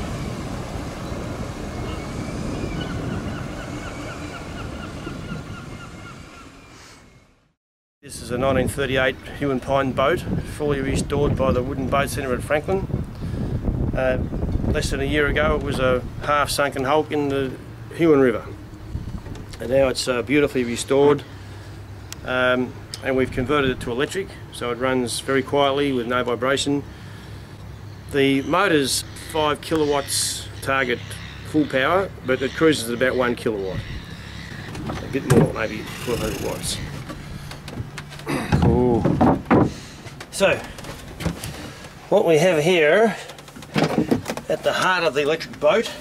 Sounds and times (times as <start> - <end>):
Speech: 8.1 - 12.9, 14.0 - 14.2, 14.8 - 18.6, 19.6 - 21.2, 22.2 - 26.9, 28.1 - 33.8, 35.1 - 36.9, 40.3 - 40.7, 42.1 - 43.3, 44.5 - 46.0.